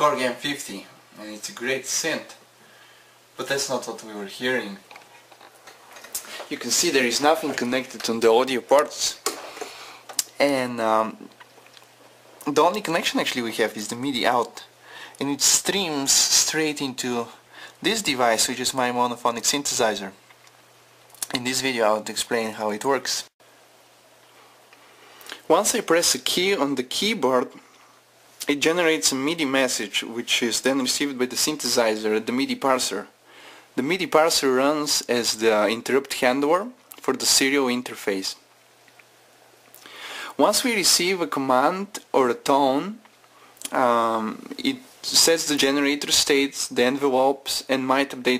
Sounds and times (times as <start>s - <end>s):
Speech: 0.0s - 2.4s, 3.4s - 4.9s, 6.4s - 9.3s, 10.2s - 11.3s, 12.4s - 20.2s, 21.2s - 23.4s, 25.3s - 27.6s, 28.4s - 33.2s, 33.8s - 38.5s, 40.4s - 43.0s, 43.6s - 48.3s.